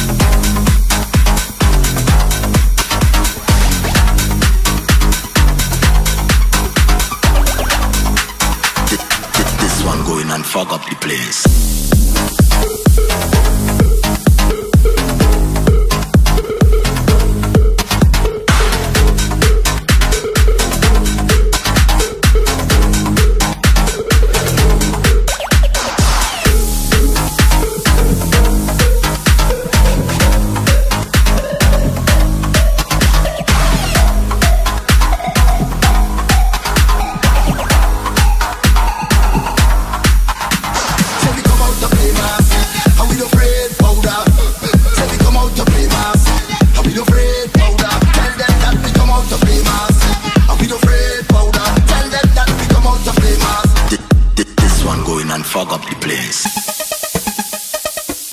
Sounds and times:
Hum: 11.5 - 25.3, 26.0 - 40.1.

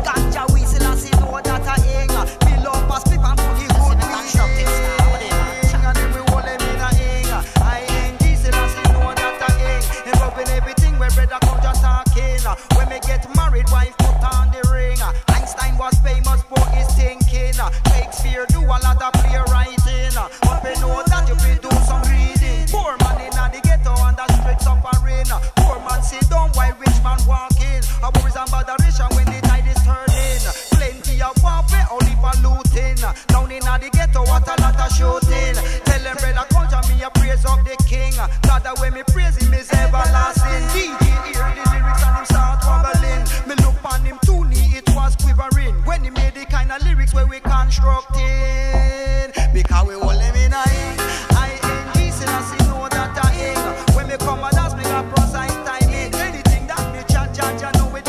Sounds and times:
Music: 0.0 - 58.0.

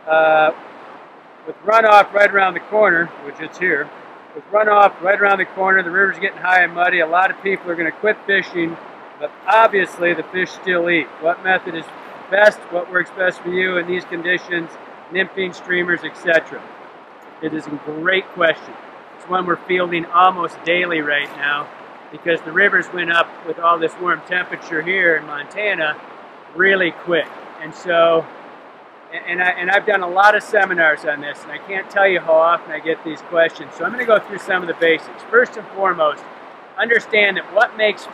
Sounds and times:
Speech: 0.0 - 0.6, 1.5 - 16.6, 17.4 - 26.0, 26.6 - 28.3, 29.1 - 36.2, 36.8 - 38.1.

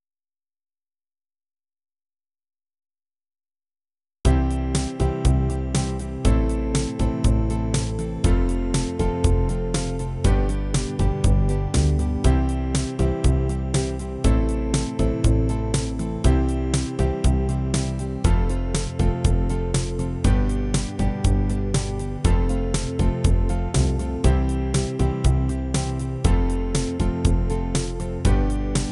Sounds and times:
Music: 4.3 - 28.9.

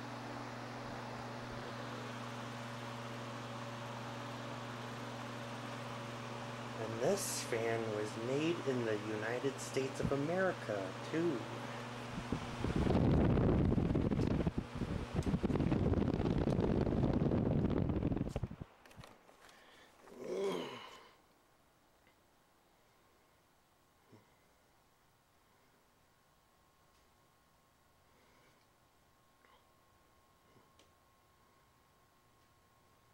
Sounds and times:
Mechanical fan: 0.0 - 33.1.

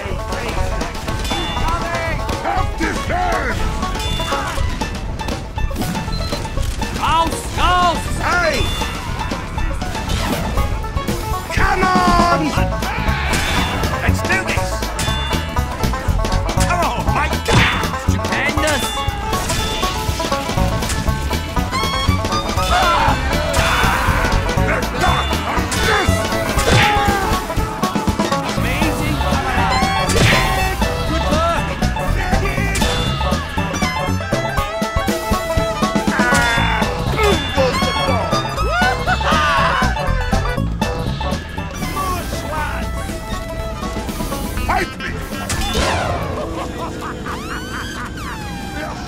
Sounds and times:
Music: 0.0 - 49.0
Speech: 7.0 - 8.7, 11.5 - 12.6, 14.0 - 14.8, 16.6 - 18.9, 28.6 - 32.9.

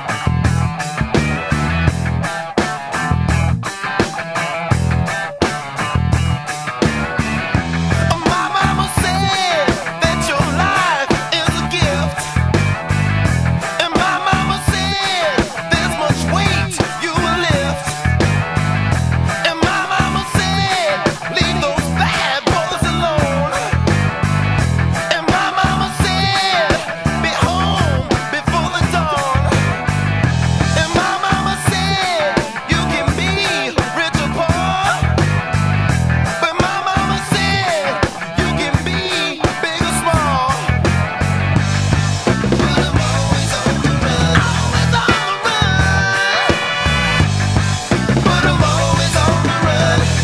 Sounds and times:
Music: 0.0 - 50.2.

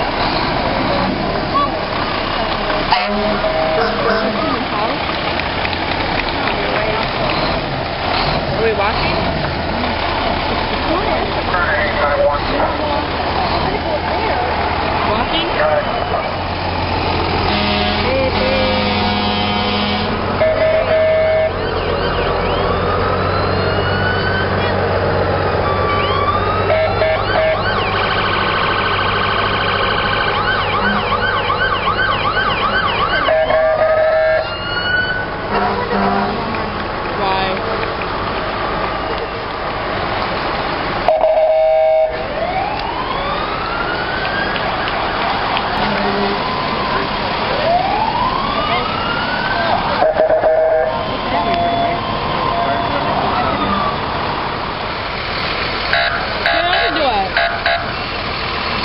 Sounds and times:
Fire engine, fire truck (siren): 0.0 - 7.6, 9.8 - 36.4, 41.0 - 58.8
Ambulance (siren): 2.4 - 5.0, 15.1 - 16.5, 17.5 - 35.6, 41.0 - 54.8, 55.9 - 58.8
Car alarm: 3.3 - 4.2, 18.8 - 24.5, 25.8 - 35.3, 41.1 - 42.2, 49.6 - 53.9, 55.9 - 57.9.

